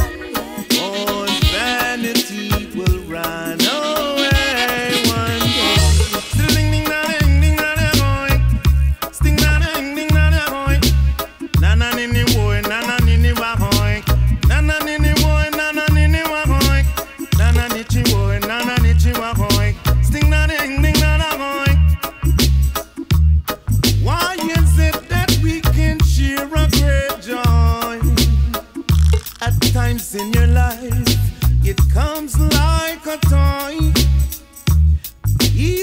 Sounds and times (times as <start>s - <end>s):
Maraca: 0.0s - 35.8s.